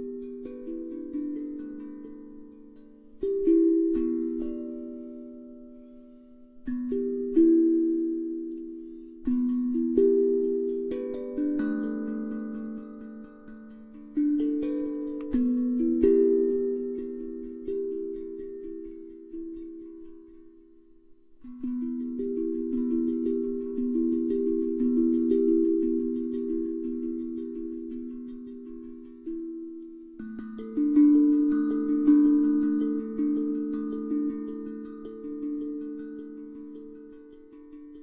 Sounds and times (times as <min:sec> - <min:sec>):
Percussion: 0:00.0 - 0:38.0.